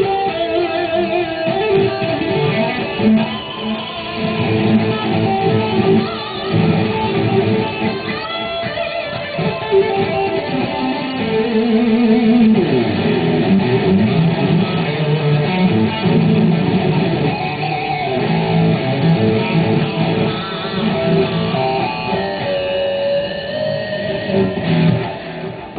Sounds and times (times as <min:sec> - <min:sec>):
Electric guitar: 0:00.0 - 0:25.7.